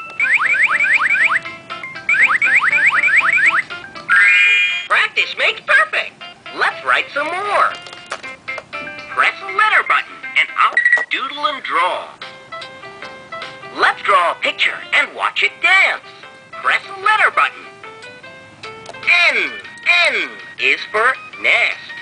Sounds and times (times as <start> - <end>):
Music: 0.0 - 22.0
Speech: 13.8 - 17.6, 19.1 - 21.9.